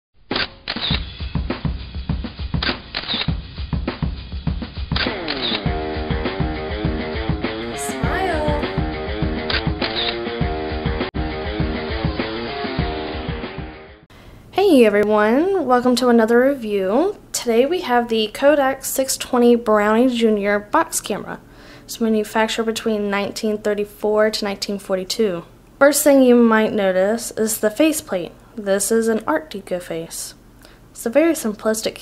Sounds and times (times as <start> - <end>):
Music: 0.3 - 14.1
Speech: 7.7 - 8.8, 14.6 - 30.4, 31.0 - 32.0.